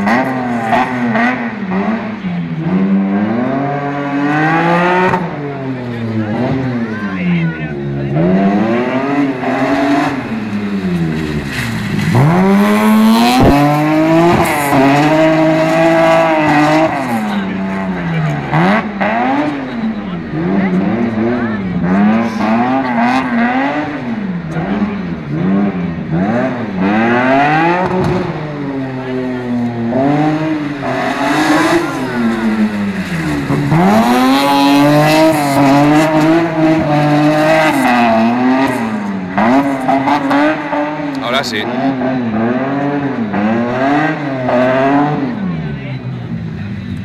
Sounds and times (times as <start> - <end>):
Accelerating, revving, vroom: 0.0 - 6.8, 8.1 - 45.6
Car: 0.0 - 47.0
Medium engine (mid frequency): 0.0 - 47.0.